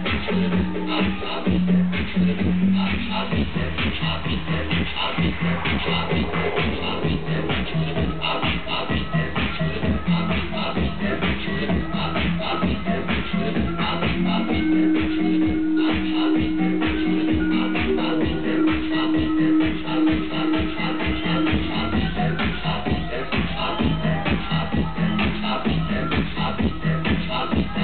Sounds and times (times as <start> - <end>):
Music: 0.0 - 27.8
Outside, urban or manmade: 0.0 - 27.8.